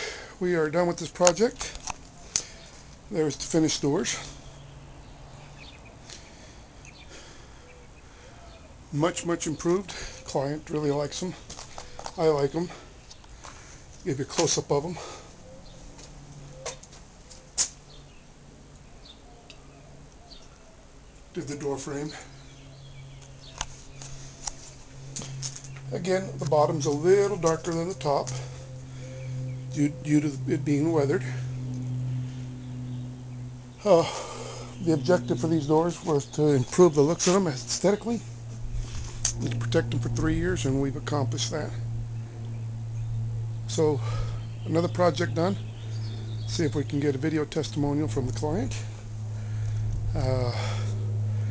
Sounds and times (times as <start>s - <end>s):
Speech: 0.4s - 1.8s, 3.1s - 4.4s, 8.9s - 11.4s, 12.2s - 12.8s, 14.0s - 15.1s, 21.3s - 22.3s, 25.9s - 28.4s, 29.8s - 31.4s, 33.8s - 34.2s, 34.8s - 38.3s, 39.4s - 41.8s, 43.7s - 45.6s, 46.5s - 48.9s, 50.2s - 50.8s.